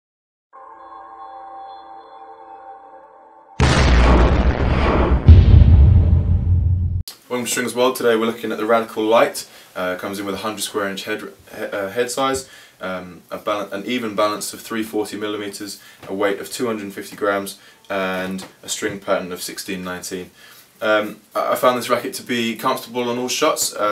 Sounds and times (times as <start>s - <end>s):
Speech: 7.1s - 23.9s.